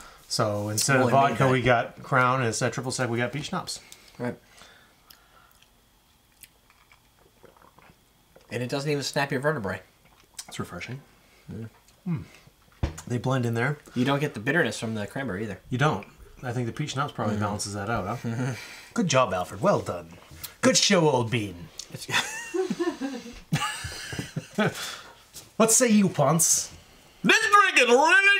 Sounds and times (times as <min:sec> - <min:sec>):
Inside, small room: 0:00.0 - 0:28.3
Speech: 0:00.3 - 0:04.4, 0:08.5 - 0:09.9, 0:13.0 - 0:18.2, 0:19.0 - 0:22.2, 0:25.6 - 0:28.3.